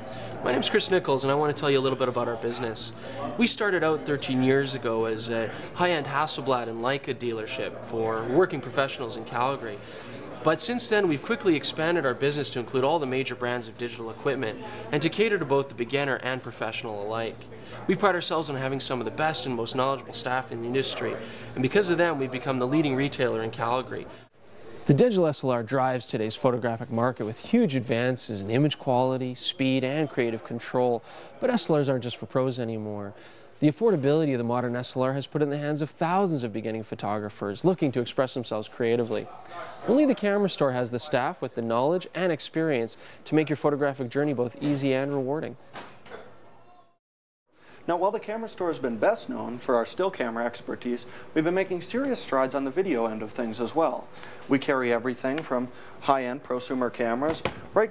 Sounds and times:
Speech: 0.0 - 45.6, 47.9 - 57.9.

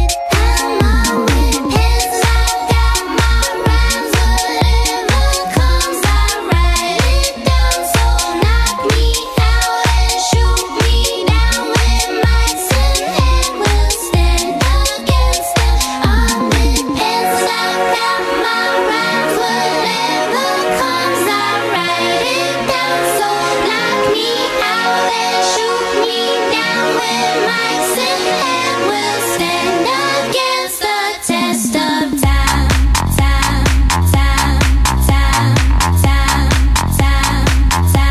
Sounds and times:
Music: 0.0 - 38.1.

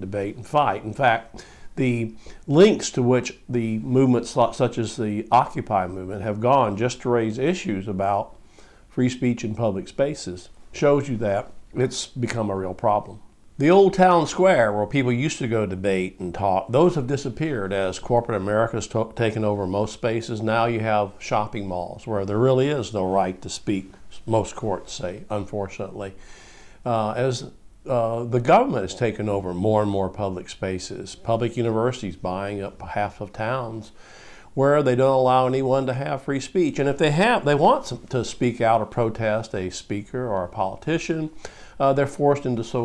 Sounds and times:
Male speech, man speaking: 0.0 - 26.2, 26.9 - 34.0, 34.6 - 42.8.

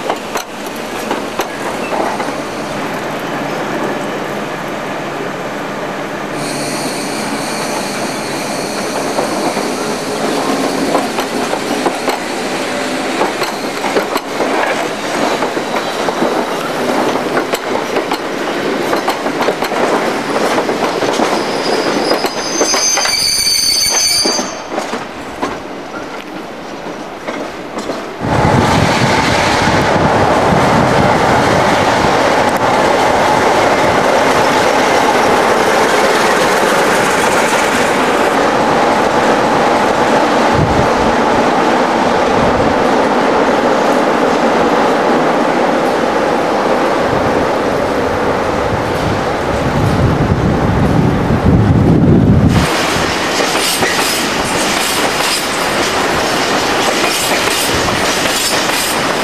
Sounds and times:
Railroad car, train wagon: 0.0 - 59.2
Train: 0.0 - 59.2
Train wheels squealing: 6.4 - 12.7, 13.4 - 14.1, 15.2 - 16.6, 20.8 - 24.9
Clickety-clack: 13.2 - 23.1, 27.2 - 28.1, 52.6 - 59.2.

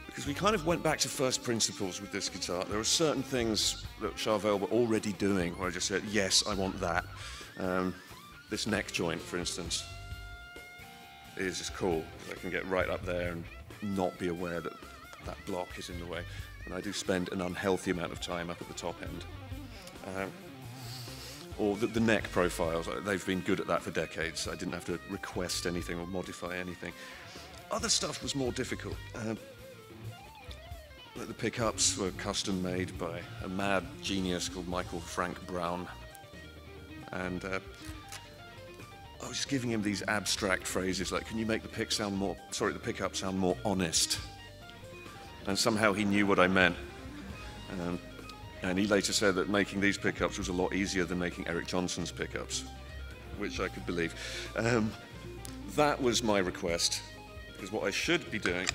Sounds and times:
Electric guitar: 0.0 - 58.7
Speech: 0.1 - 9.9, 11.4 - 19.3, 20.0 - 20.4, 21.6 - 27.0, 27.7 - 29.4, 31.2 - 36.0, 37.1 - 37.6, 39.2 - 44.3, 45.4 - 46.8, 47.7 - 48.0, 48.6 - 52.7, 53.4 - 55.0, 55.7 - 58.7.

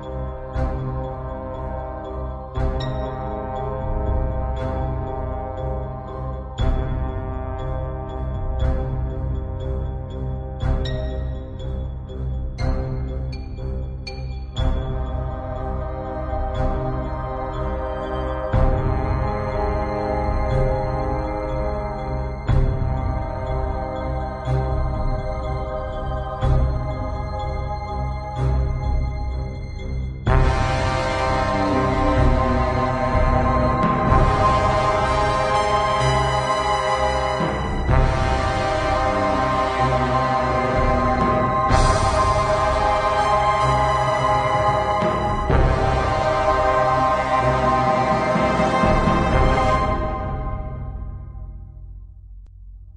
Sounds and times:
Theme music: 0.0 - 51.8.

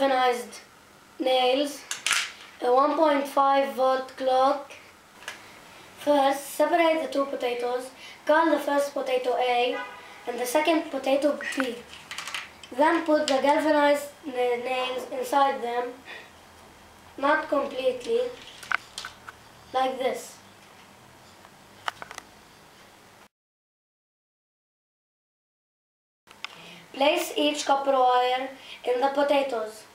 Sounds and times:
Speech: 0.0 - 1.8, 2.6 - 4.9, 6.0 - 11.9, 12.7 - 16.0, 17.2 - 18.4, 19.7 - 20.4, 26.9 - 29.9.

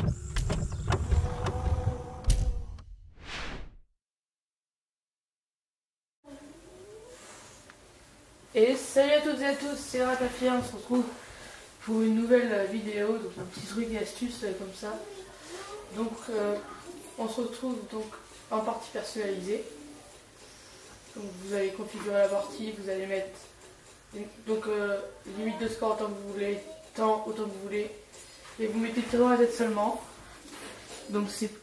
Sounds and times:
Speech: 8.5 - 11.2, 11.8 - 20.0, 21.1 - 23.5, 24.1 - 28.0, 28.6 - 30.1, 31.0 - 31.6.

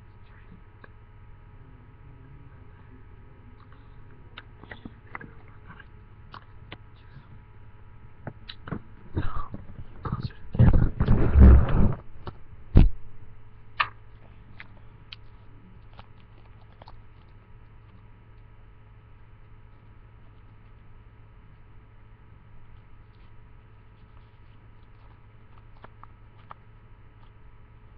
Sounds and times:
Speech: 1.5 - 6.1, 10.0 - 10.8.

